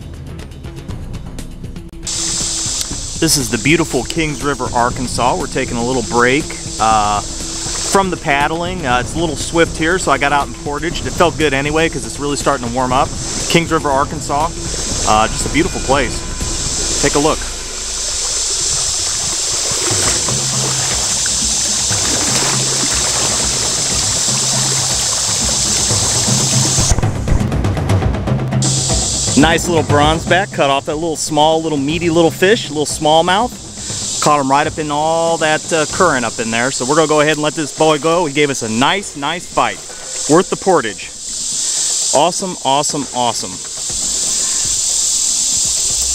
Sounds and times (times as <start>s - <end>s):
Speech: 3.2s - 7.3s, 7.9s - 16.2s, 17.0s - 17.5s, 29.4s - 33.6s, 34.2s - 41.2s, 42.1s - 43.6s.